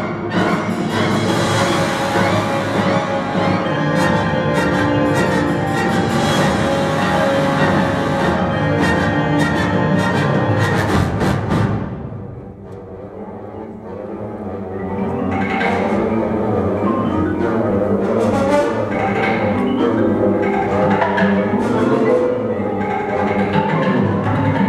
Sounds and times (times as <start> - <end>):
Orchestra: 0.0 - 24.6
Timpani: 0.0 - 24.6.